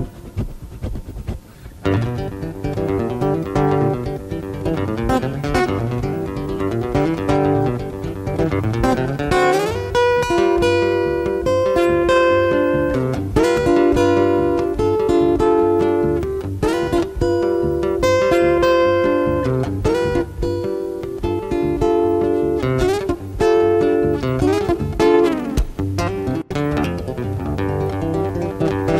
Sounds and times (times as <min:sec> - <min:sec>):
Music: 0:00.0 - 0:28.9.